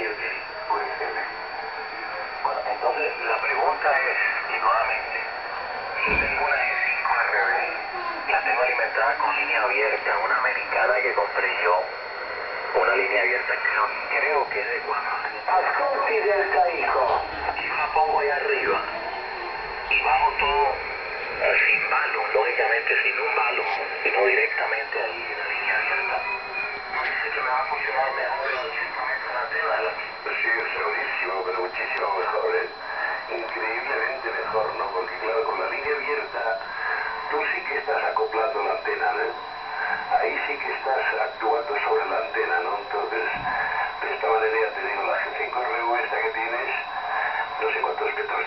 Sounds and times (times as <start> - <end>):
Speech: 0.0 - 5.3, 6.0 - 11.9, 12.8 - 19.3, 19.9 - 20.8, 21.4 - 48.4
Radio: 0.0 - 48.4.